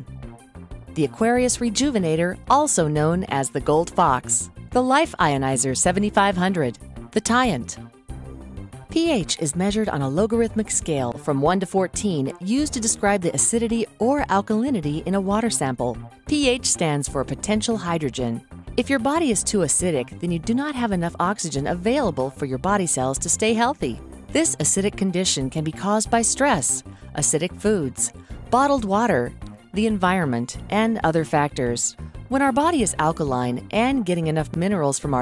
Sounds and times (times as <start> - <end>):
Music: 0.0 - 35.2
Speech: 1.0 - 7.8, 9.0 - 35.2.